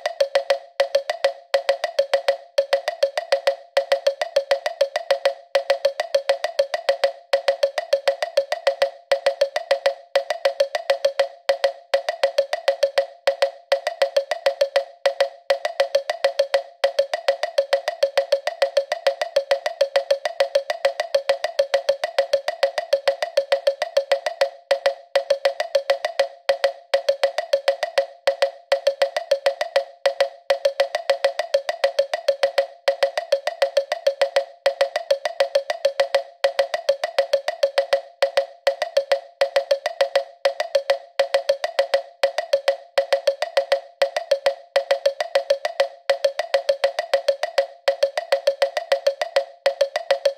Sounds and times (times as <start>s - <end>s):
Music: 0.0s - 50.3s.